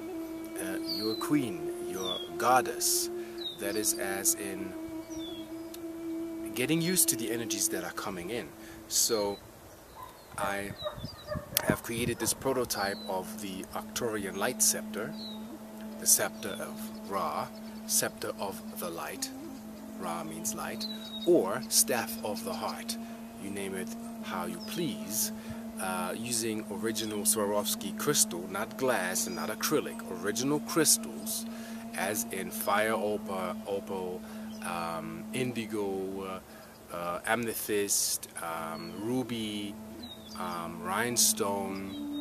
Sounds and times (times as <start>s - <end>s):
Outside, rural or natural: 0.0s - 42.2s
Speech: 0.6s - 4.8s, 6.5s - 9.4s, 10.4s - 10.8s, 11.6s - 15.1s, 16.0s - 19.4s, 20.0s - 39.8s, 40.4s - 42.0s.